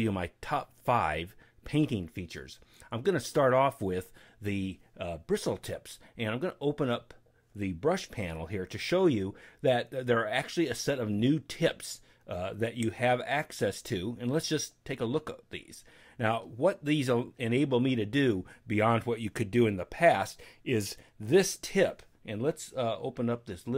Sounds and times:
Speech: 0.0 - 23.7.

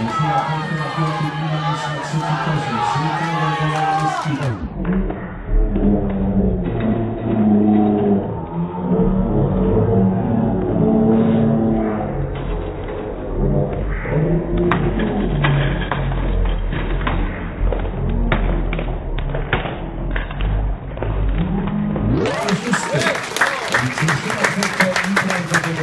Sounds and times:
Speech: 0.0 - 5.0, 22.2 - 25.8.

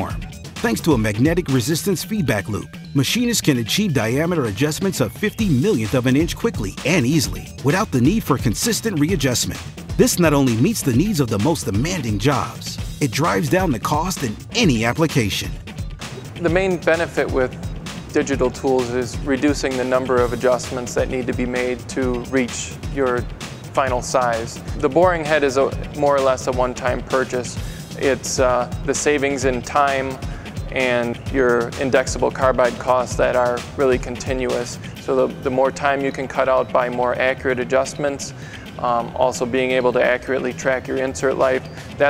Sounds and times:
Speech: 0.0 - 15.6, 16.4 - 17.5, 18.1 - 42.0
Music: 0.0 - 42.0.

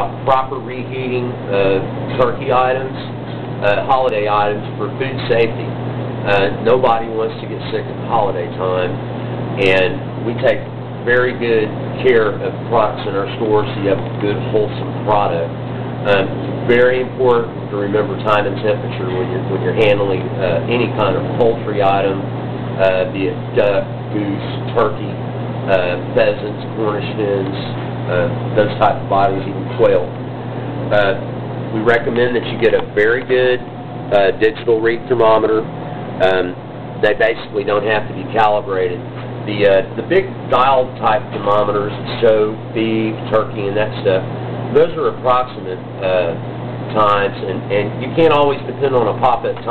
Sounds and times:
Speech: 0.0 - 9.0, 9.6 - 30.2, 30.9 - 49.7.

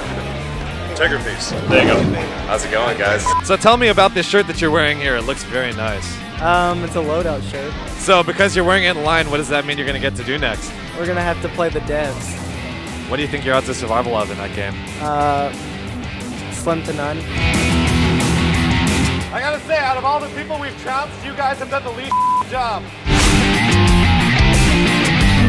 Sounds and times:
Music: 0.0 - 25.4
Speech: 1.0 - 12.3, 19.3 - 22.9.

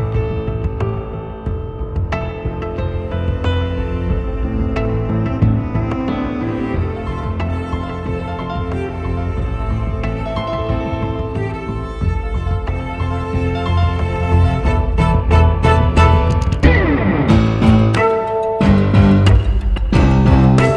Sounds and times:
Effects unit: 0.0 - 20.7
Music: 0.0 - 20.7.

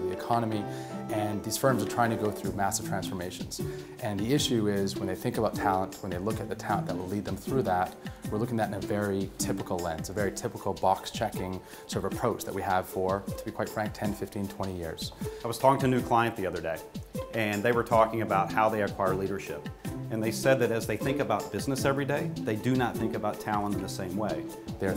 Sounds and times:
Music: 0.0 - 24.9
Speech: 0.0 - 24.9.

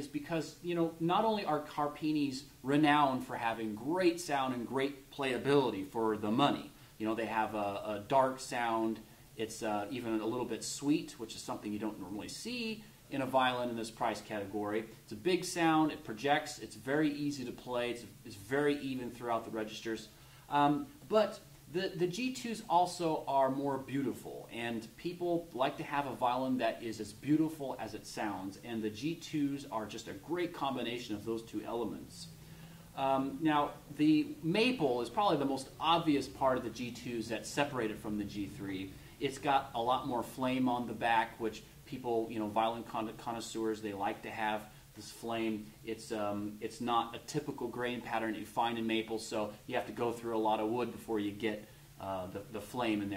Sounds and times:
Speech: 0.0 - 53.1.

